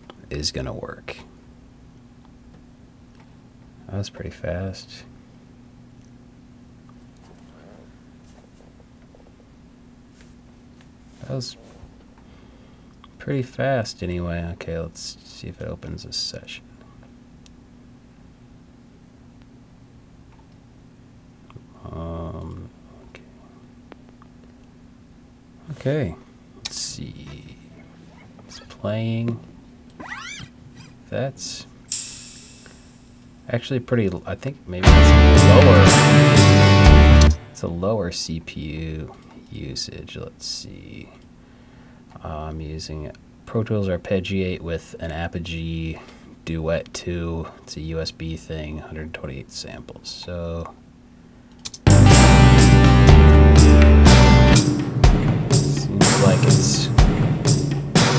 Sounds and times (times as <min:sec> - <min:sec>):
Speech: 0:00.2 - 0:01.3, 0:03.9 - 0:05.1, 0:11.2 - 0:11.7, 0:13.2 - 0:16.7, 0:21.8 - 0:23.3, 0:25.6 - 0:27.8, 0:28.5 - 0:29.5, 0:31.1 - 0:31.8, 0:33.5 - 0:35.9, 0:37.5 - 0:41.2, 0:42.2 - 0:50.8, 0:55.6 - 0:57.0.